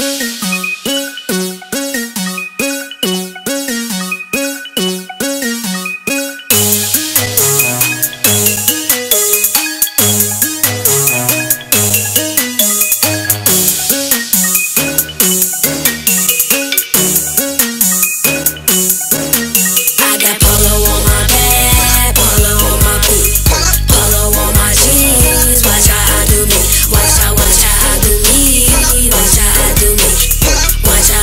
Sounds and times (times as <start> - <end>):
Music: 0.0 - 31.2.